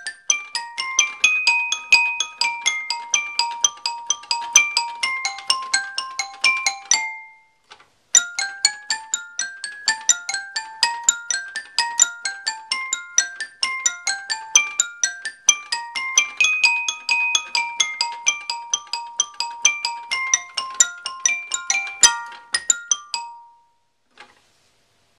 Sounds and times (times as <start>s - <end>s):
Piano: 0.0s - 23.9s.